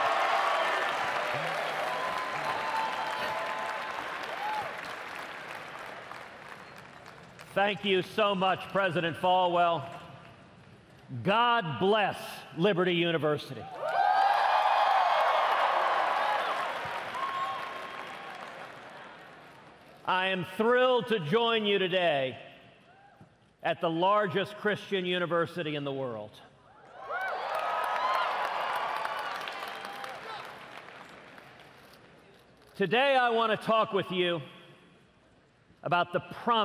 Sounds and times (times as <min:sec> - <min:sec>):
Narration, monologue: 0:07.4 - 0:13.8, 0:19.9 - 0:26.7, 0:32.2 - 0:36.6
Male speech, man speaking: 0:07.5 - 0:09.9, 0:11.2 - 0:13.6, 0:20.1 - 0:22.4, 0:23.6 - 0:26.4, 0:32.8 - 0:34.5, 0:35.9 - 0:36.6.